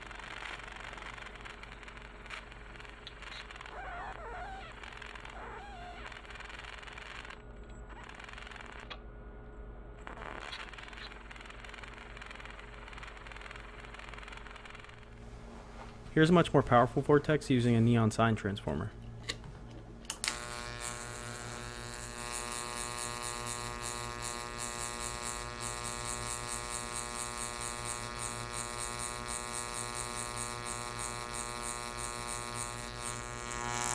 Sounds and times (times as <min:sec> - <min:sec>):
Electric shaver, electric razor: 0:00.0 - 0:09.0, 0:10.0 - 0:15.2, 0:20.2 - 0:33.9.